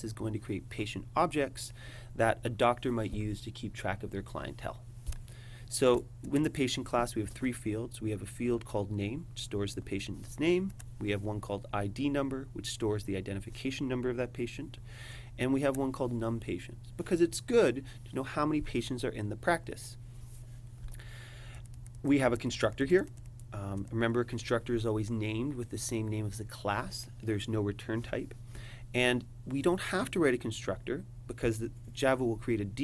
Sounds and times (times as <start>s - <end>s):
Speech: 0.0s - 4.8s, 5.7s - 14.8s, 15.4s - 20.0s, 22.0s - 28.4s, 29.0s - 32.8s.